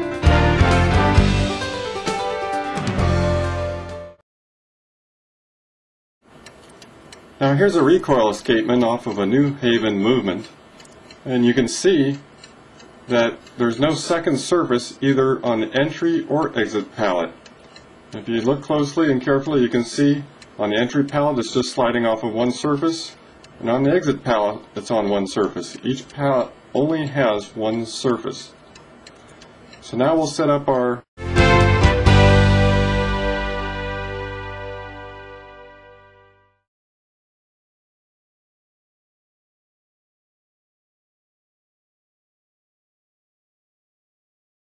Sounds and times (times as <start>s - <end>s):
Music: 0.0s - 4.2s, 31.2s - 36.7s.